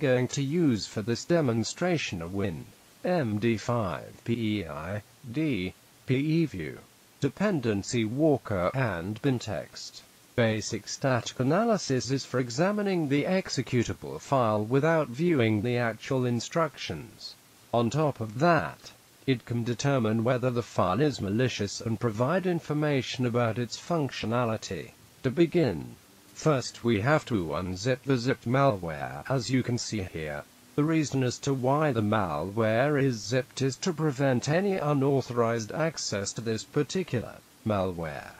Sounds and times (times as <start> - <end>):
Speech: 0.0 - 38.3.